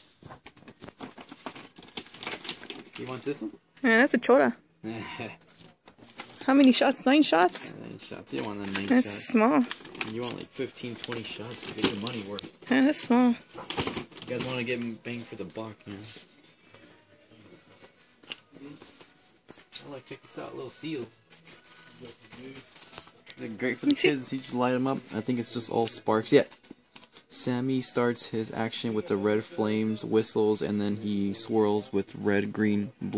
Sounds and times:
Inside, public space: 14.3 - 33.1.

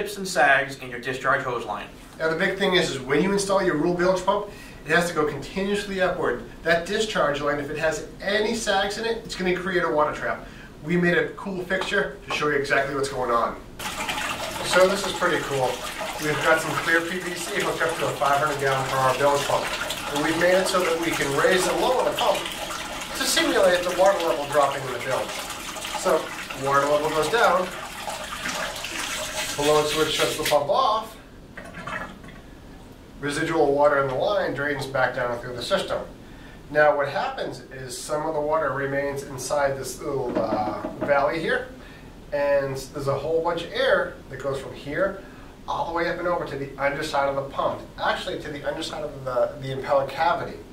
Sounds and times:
Speech: 0.0 - 13.6, 14.6 - 22.5, 23.1 - 25.3, 26.0 - 27.8, 29.6 - 31.2, 33.2 - 50.7
Inside, small room: 0.0 - 50.7
Water: 11.2 - 36.0.

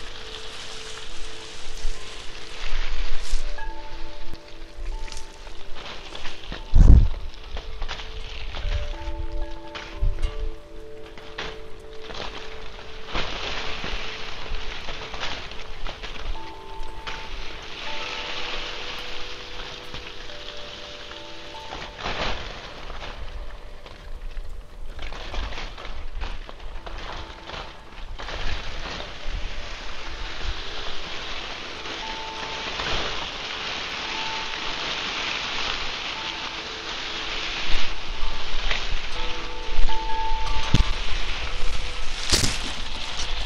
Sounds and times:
Music: 0.0 - 43.4
Rustling leaves: 0.0 - 43.4.

